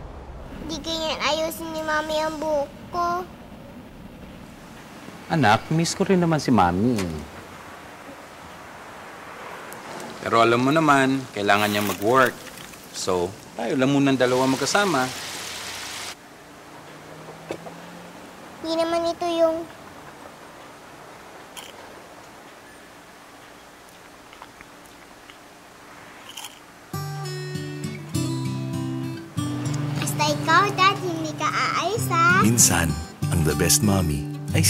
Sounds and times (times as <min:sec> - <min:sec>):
Music: 0:26.9 - 0:34.7.